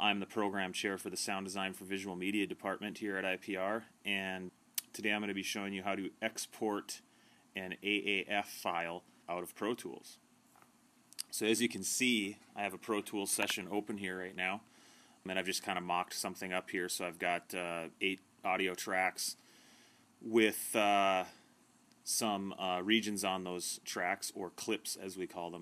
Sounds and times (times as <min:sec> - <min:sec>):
Speech: 0:00.0 - 0:07.0, 0:07.6 - 0:10.2, 0:11.2 - 0:14.7, 0:15.3 - 0:19.4, 0:20.2 - 0:21.4, 0:22.1 - 0:25.6.